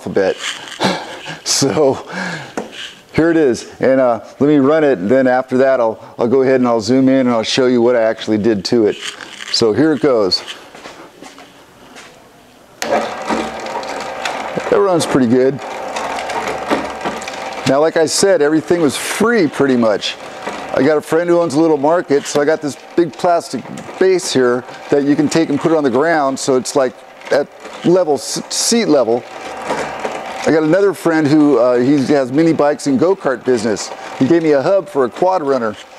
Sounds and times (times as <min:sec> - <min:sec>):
Speech: 0:00.0 - 0:00.4, 0:01.5 - 0:02.1, 0:03.2 - 0:10.5, 0:14.6 - 0:15.6, 0:17.6 - 0:29.3, 0:30.5 - 0:35.9.